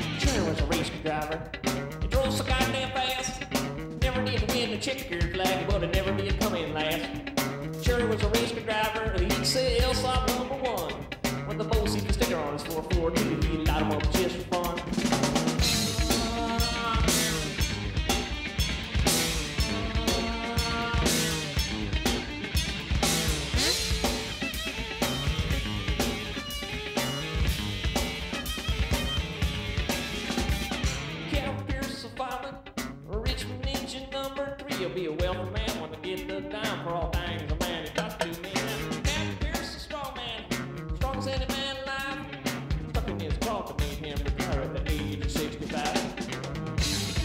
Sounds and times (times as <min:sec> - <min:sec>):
Music: 0:00.0 - 0:47.2.